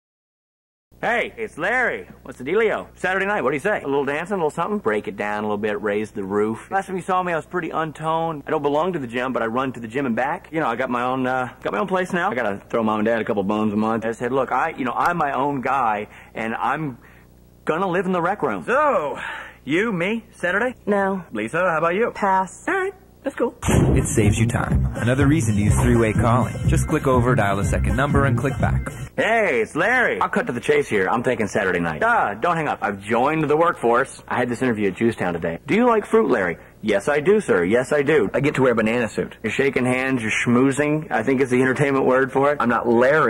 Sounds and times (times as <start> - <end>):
Speech: 1.0 - 17.0, 17.6 - 43.3
Music: 23.9 - 29.2.